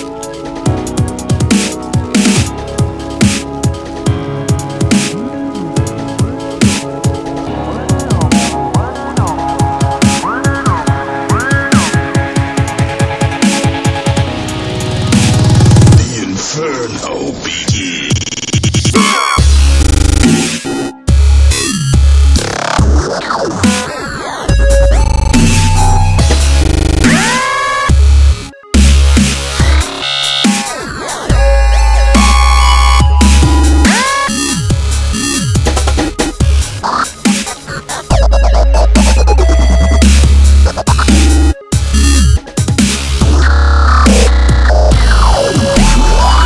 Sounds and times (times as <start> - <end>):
Dubstep: 0.0 - 46.4.